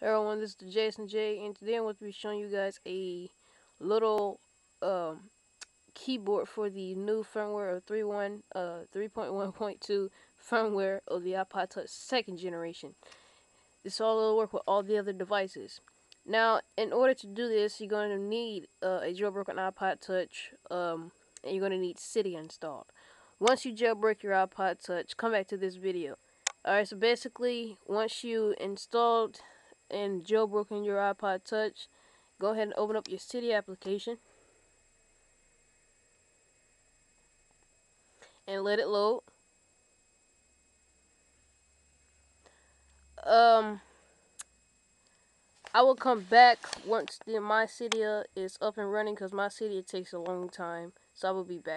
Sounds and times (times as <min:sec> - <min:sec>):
Speech: 0:00.0 - 0:05.3, 0:06.0 - 0:13.0, 0:13.9 - 0:34.2, 0:38.5 - 0:39.3, 0:43.2 - 0:43.9, 0:45.7 - 0:51.7.